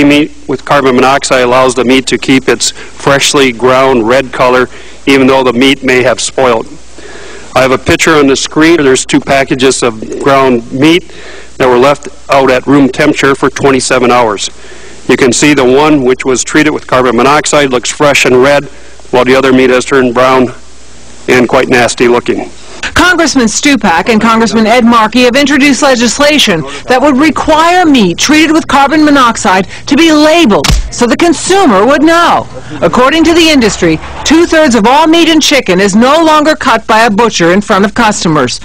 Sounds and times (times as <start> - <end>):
Speech: 0.0 - 6.7, 7.6 - 11.0, 15.1 - 20.6, 21.3 - 38.6.